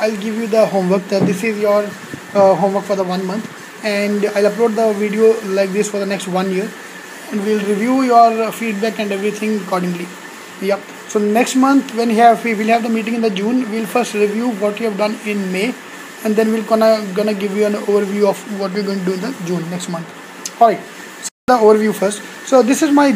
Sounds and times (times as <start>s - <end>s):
Speech: 0.0s - 20.9s, 21.5s - 23.1s.